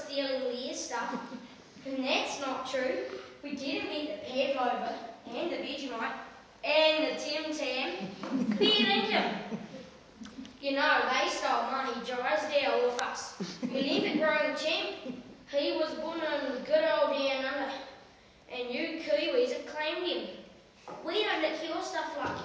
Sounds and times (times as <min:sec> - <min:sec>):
Child speech, kid speaking: 0:00.0 - 0:09.5, 0:10.6 - 0:22.4
Narration, monologue: 0:00.0 - 0:22.4.